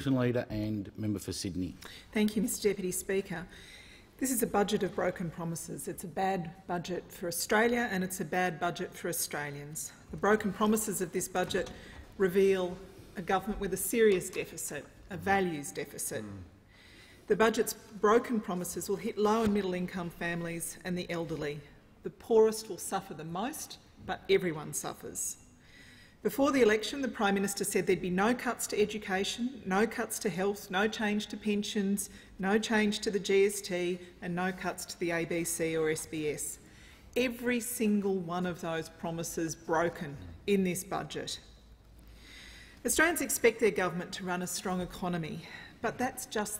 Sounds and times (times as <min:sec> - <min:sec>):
Narration, monologue: 0:00.0 - 0:46.5
Female speech, woman speaking: 0:02.1 - 0:03.5, 0:04.2 - 0:16.5, 0:17.3 - 0:25.4, 0:26.3 - 0:36.6, 0:37.2 - 0:41.5, 0:42.9 - 0:46.5.